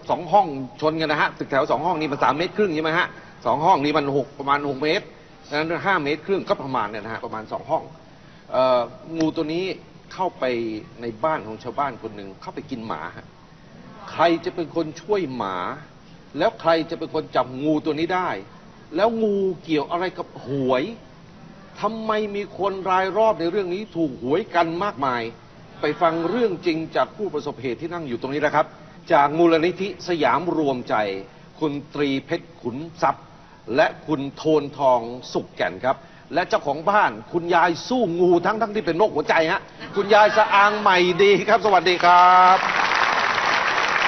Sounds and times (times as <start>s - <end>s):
Speech: 0.1s - 7.9s, 8.5s - 13.2s, 21.7s - 42.7s.